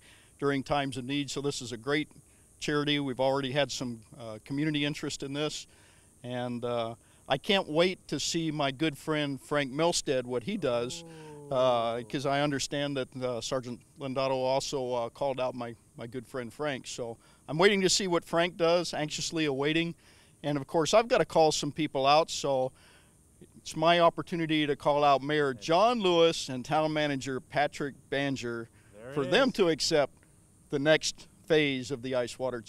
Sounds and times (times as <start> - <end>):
Speech: 0.4 - 5.7, 6.3 - 22.7, 23.4 - 30.1, 30.8 - 32.6.